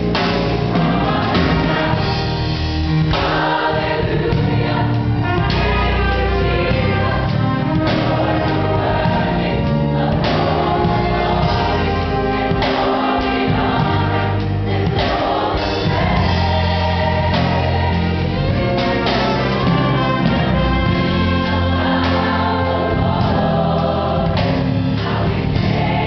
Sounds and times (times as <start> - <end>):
Music: 0.0 - 26.0.